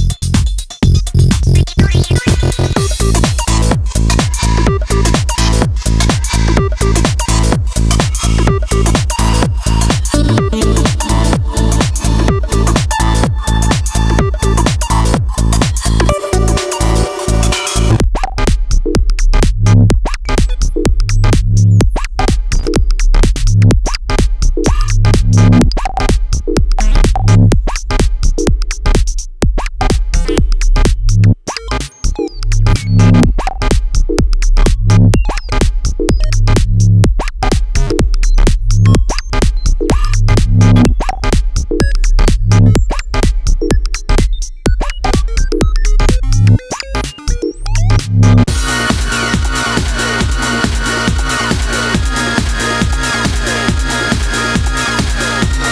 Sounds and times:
Electronic music: 0:00.0 - 0:55.7
Sampler: 0:01.3 - 0:18.0, 0:34.6 - 0:55.7.

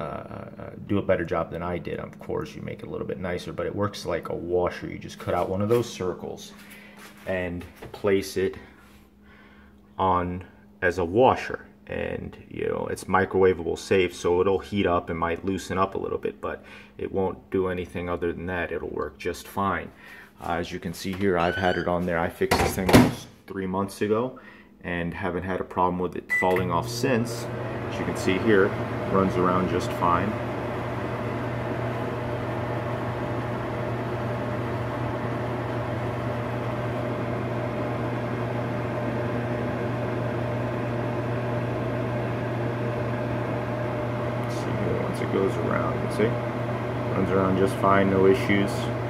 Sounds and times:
Speech: 0:00.0 - 0:06.6, 0:07.2 - 0:08.7, 0:10.0 - 0:30.4, 0:44.4 - 0:46.4, 0:47.1 - 0:49.0
Microwave oven: 0:00.0 - 0:16.9, 0:21.2 - 0:23.2, 0:26.3 - 0:49.0.

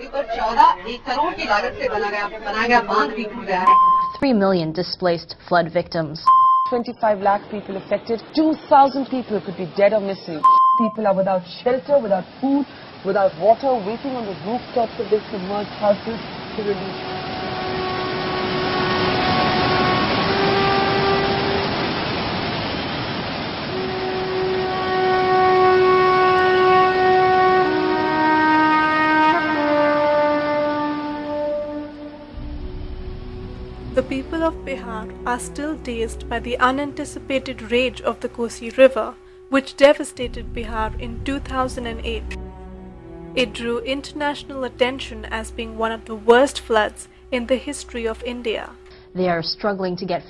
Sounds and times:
Outside, rural or natural: 0:06.3 - 0:37.9
Music: 0:17.1 - 0:21.6, 0:23.8 - 0:50.3.

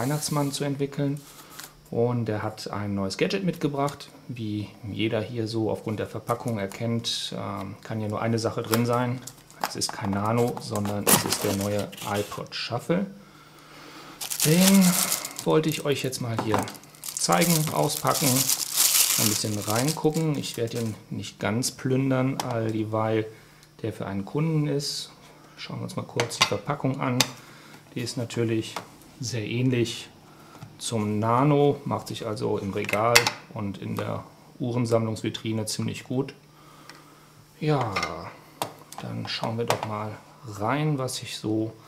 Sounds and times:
Speech: 0:00.0 - 0:01.2, 0:01.9 - 0:13.2, 0:14.4 - 0:30.2, 0:30.8 - 0:36.4, 0:37.6 - 0:38.4, 0:39.0 - 0:41.8.

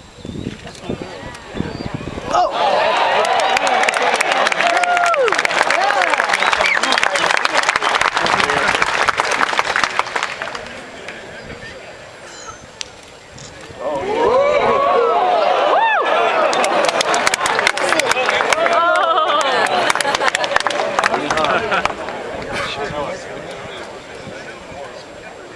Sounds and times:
Speech: 0:21.1 - 0:25.5.

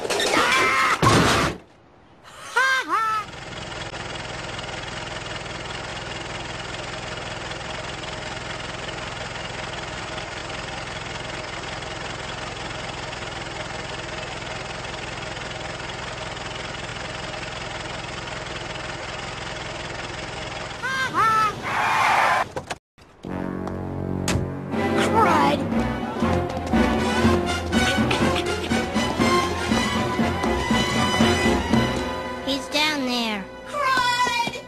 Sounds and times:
Car: 0:03.0 - 0:32.9
Music: 0:23.3 - 0:34.6.

